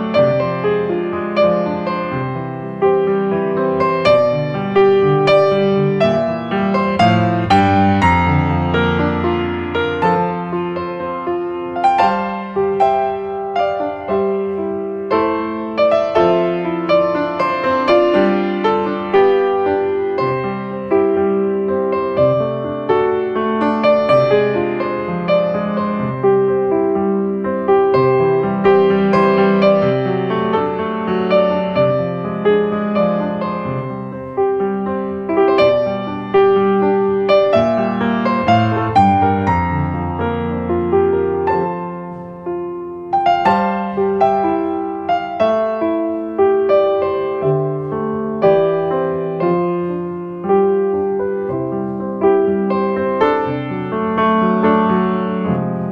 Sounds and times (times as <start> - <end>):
Electric piano: 0.0 - 55.9.